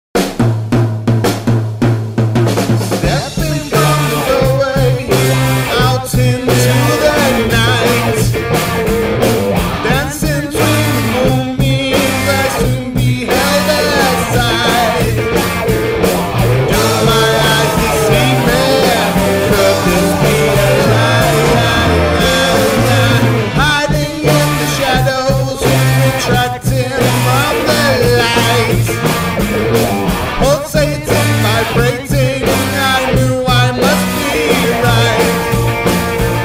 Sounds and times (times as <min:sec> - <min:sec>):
Bass drum: 0:00.2 - 0:36.4
Drum kit: 0:00.2 - 0:36.4.